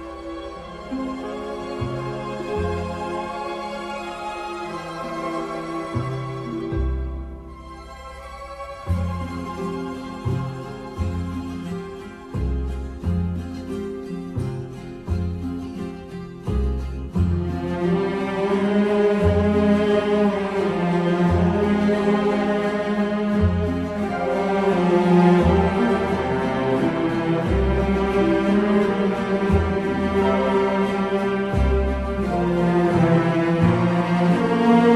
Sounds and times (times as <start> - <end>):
Soundtrack music: 0.0 - 34.9.